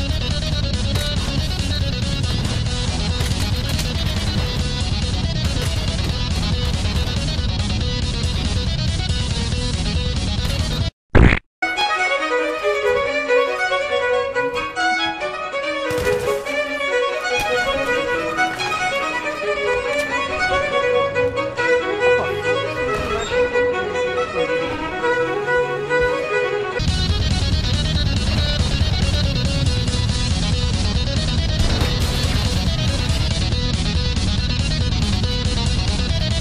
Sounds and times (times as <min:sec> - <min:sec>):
Violin, fiddle: 0:11.6 - 0:31.4
String section: 0:11.6 - 0:35.0.